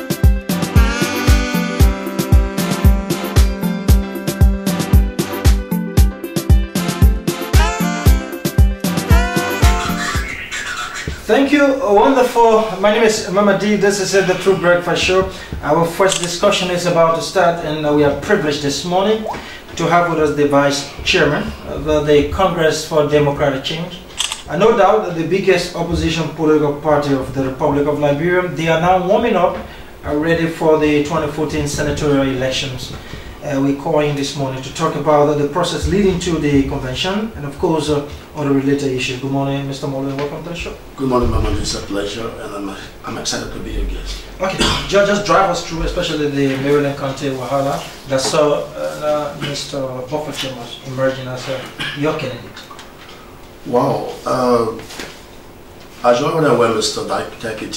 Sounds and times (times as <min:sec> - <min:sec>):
Music: 0:00.0 - 0:11.2
Speech: 0:11.2 - 0:52.6, 0:53.6 - 0:54.9, 0:56.0 - 0:57.7.